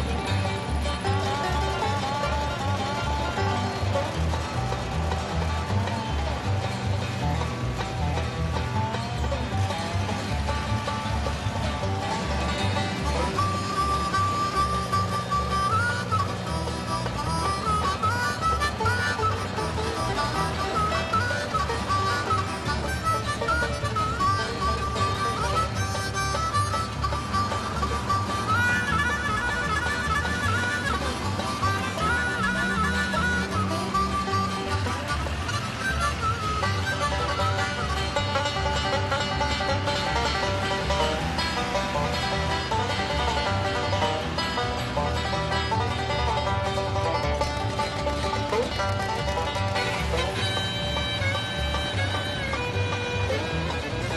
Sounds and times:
Bagpipes: 0.0s - 54.1s.

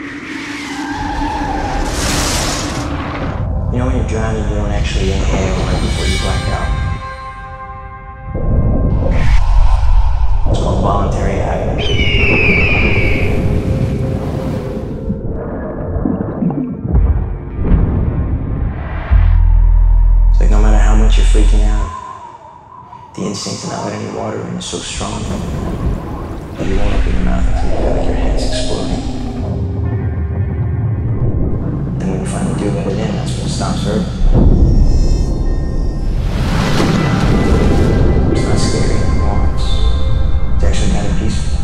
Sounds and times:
Music: 2.8s - 22.0s, 26.6s - 41.6s
Speech: 3.7s - 6.8s, 10.5s - 11.8s, 20.4s - 22.0s, 23.2s - 25.5s, 26.6s - 29.2s, 32.0s - 34.2s, 38.4s - 39.9s, 40.6s - 41.6s.

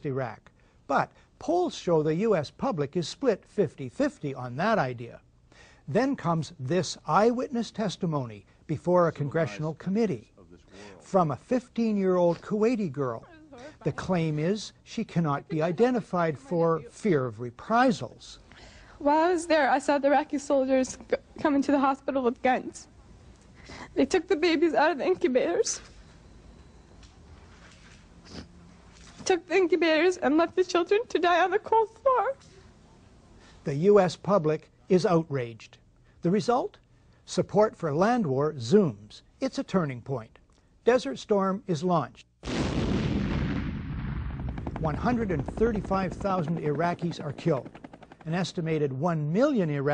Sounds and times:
Male speech, man speaking: 0.0s - 5.2s, 5.9s - 18.4s, 33.6s - 42.3s, 44.8s - 49.9s
Narration, monologue: 0.0s - 49.9s
Female speech, woman speaking: 13.2s - 14.1s, 15.4s - 17.0s, 19.0s - 22.9s, 24.0s - 25.9s, 29.2s - 32.4s.

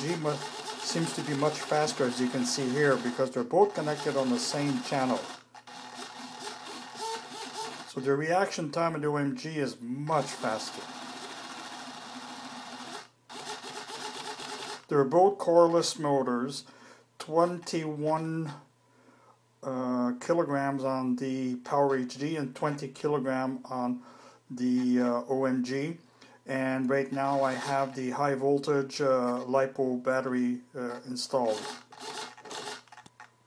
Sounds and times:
Speech: 0.0s - 5.3s, 7.9s - 10.9s, 14.9s - 18.7s, 19.6s - 31.7s.

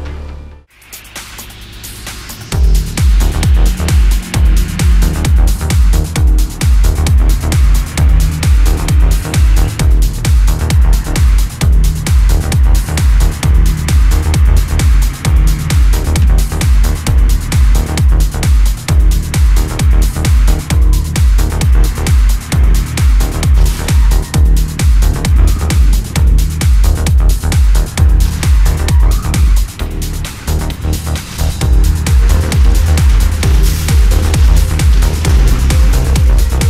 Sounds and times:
Music: 0.0s - 36.6s
Vehicle: 0.0s - 36.6s.

